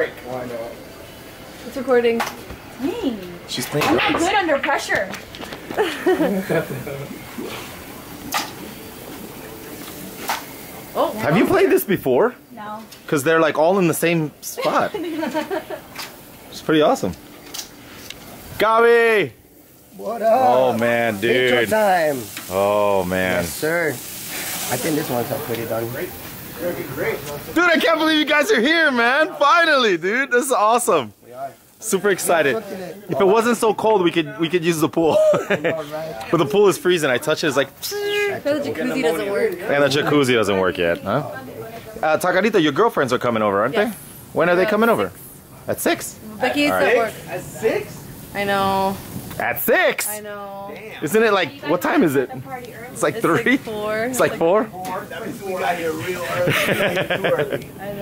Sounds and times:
Sizzle: 5.6 - 58.0.

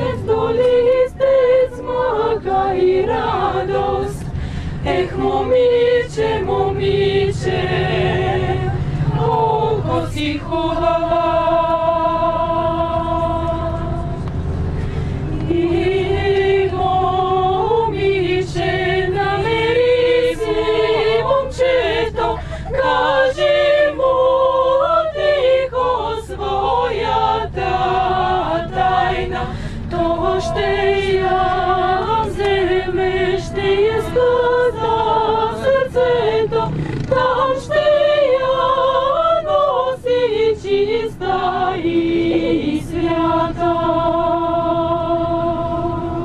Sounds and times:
Choir: 0.0 - 46.2.

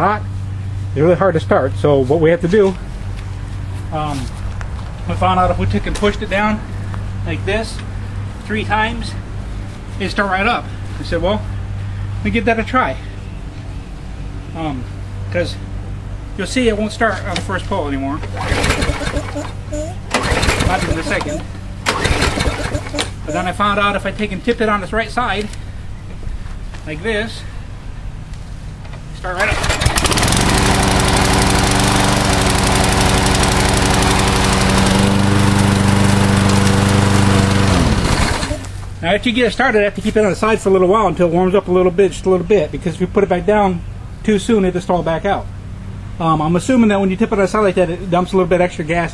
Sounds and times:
Speech: 0.0 - 0.3, 1.0 - 2.8, 3.9 - 4.3, 5.1 - 6.6, 7.3 - 7.9, 8.5 - 9.2, 10.0 - 11.5, 12.2 - 13.0, 14.6 - 15.6, 16.4 - 18.2, 20.6 - 21.5, 22.9 - 25.5, 26.8 - 27.5, 29.2 - 29.6, 39.0 - 45.5, 46.2 - 49.1
Lawn mower: 18.2 - 23.5, 29.4 - 38.9.

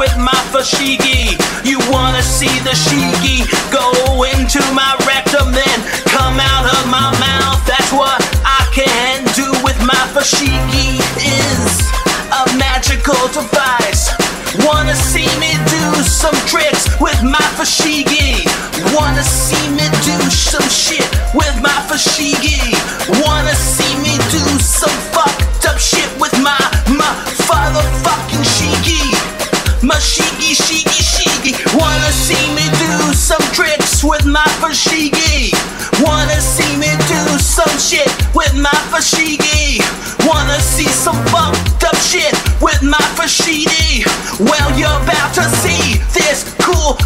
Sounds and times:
Music: 0.0 - 47.0.

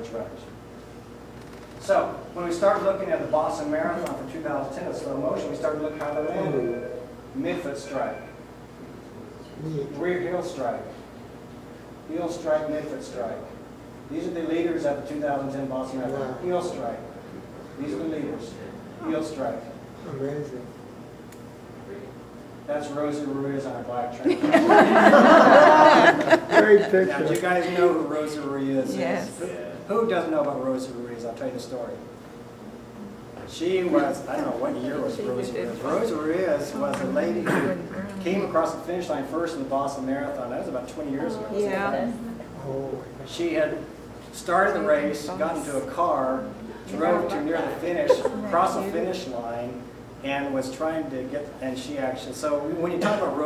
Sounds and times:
Female speech, woman speaking: 28.8 - 29.5, 33.9 - 38.6, 41.2 - 42.5, 44.6 - 45.9, 46.9 - 49.1.

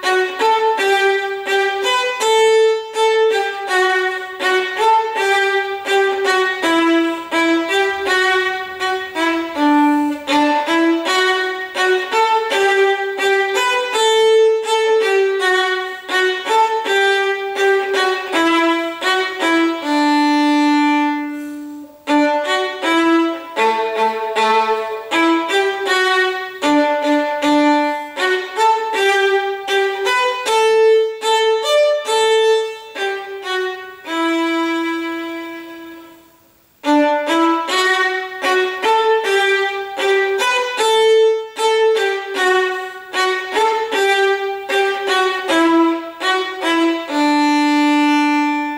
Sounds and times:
Violin, fiddle: 0.0 - 48.7.

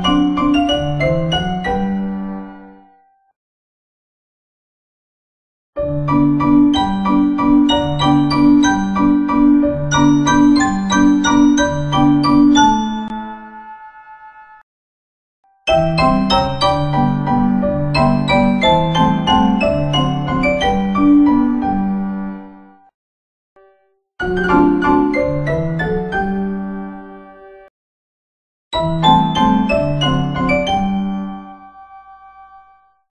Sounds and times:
Music: 0.0 - 3.4, 5.8 - 14.6, 15.5 - 23.0, 23.6 - 27.7, 28.8 - 33.1.

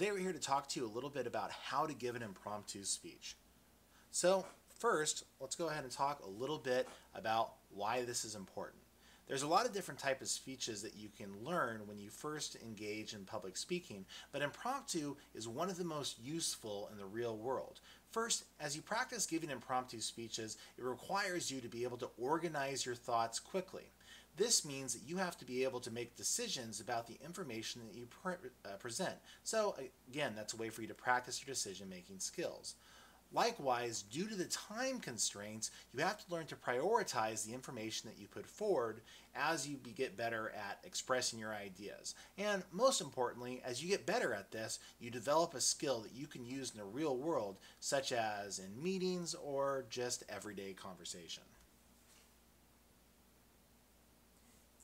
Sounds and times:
Male speech, man speaking: 0.0 - 3.4, 4.1 - 51.6
Narration, monologue: 0.0 - 54.8.

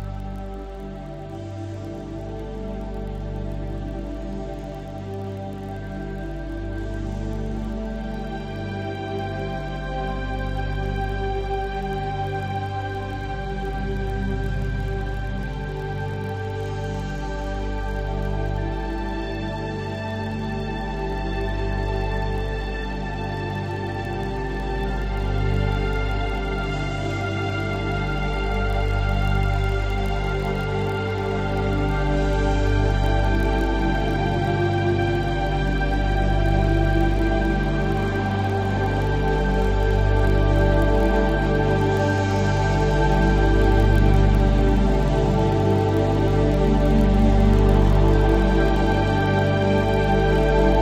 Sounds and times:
New-age music: 0.0 - 50.8.

